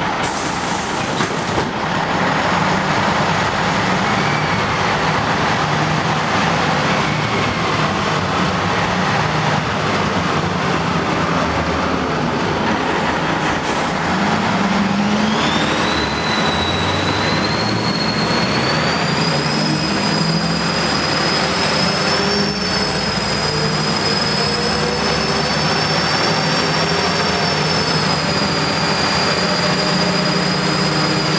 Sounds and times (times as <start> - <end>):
Bus: 0.0 - 31.3
Engine: 0.0 - 31.3.